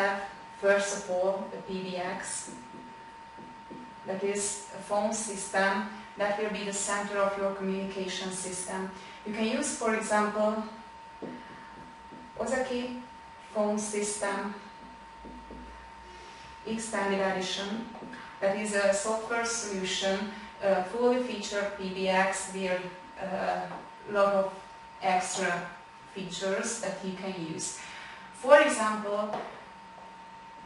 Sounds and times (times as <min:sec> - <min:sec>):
Speech: 0:00.0 - 0:02.6, 0:04.1 - 0:10.8, 0:12.4 - 0:14.7, 0:16.7 - 0:27.8, 0:28.4 - 0:29.5.